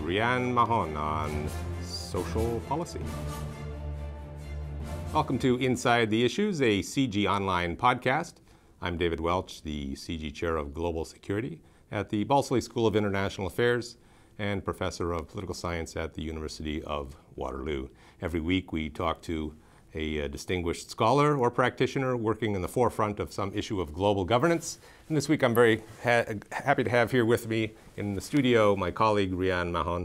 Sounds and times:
Speech: 0:00.0 - 0:03.1, 0:05.1 - 0:30.0.

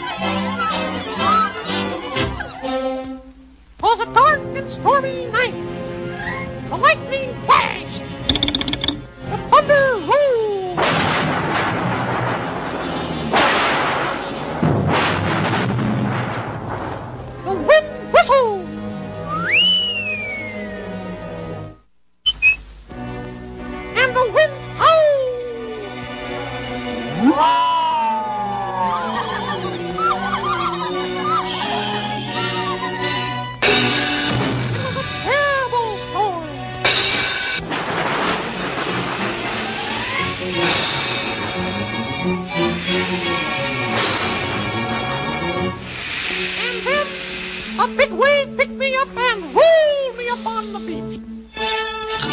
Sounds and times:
Music: 0:00.0 - 0:52.3.

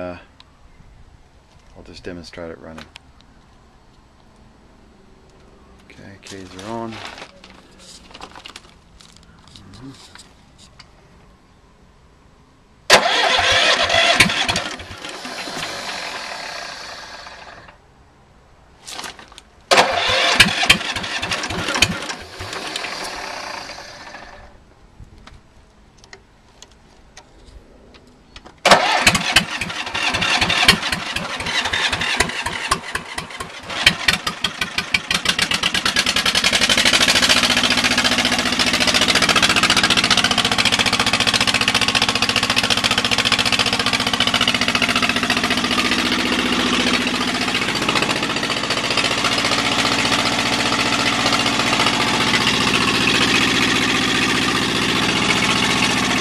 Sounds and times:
Medium engine (mid frequency): 0:04.3 - 0:11.3, 0:12.8 - 0:18.0, 0:18.6 - 0:56.2
Engine starting: 0:12.9 - 0:17.8, 0:18.9 - 0:24.6, 0:28.6 - 0:37.3
Idling: 0:12.9 - 0:17.8, 0:19.7 - 0:24.6, 0:28.6 - 0:56.2.

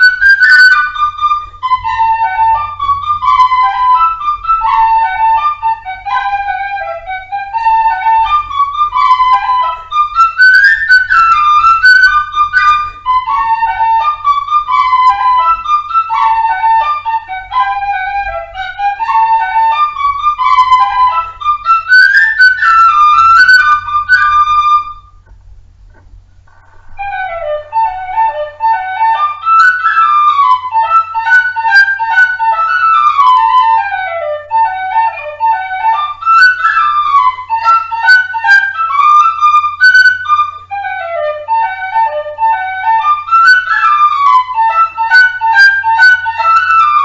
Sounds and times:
Flute: 0:00.0 - 0:47.0.

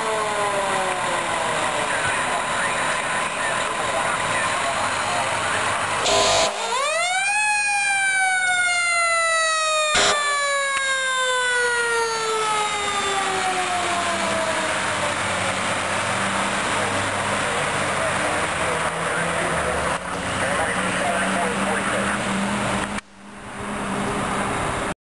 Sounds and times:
Vehicle: 0:00.0 - 0:25.0
Speech: 0:01.0 - 0:05.8, 0:17.5 - 0:19.8, 0:20.4 - 0:22.3
Medium engine (mid frequency): 0:14.8 - 0:25.0.

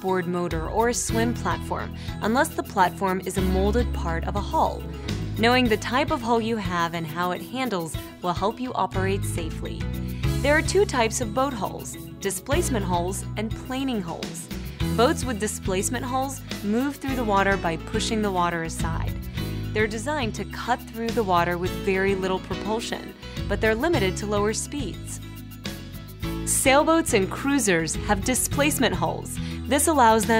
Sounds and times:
Speech: 0:00.0 - 0:04.8, 0:05.4 - 0:09.8, 0:10.4 - 0:14.4, 0:15.0 - 0:19.1, 0:19.8 - 0:25.2, 0:26.5 - 0:30.3
Music: 0:00.0 - 0:30.3.

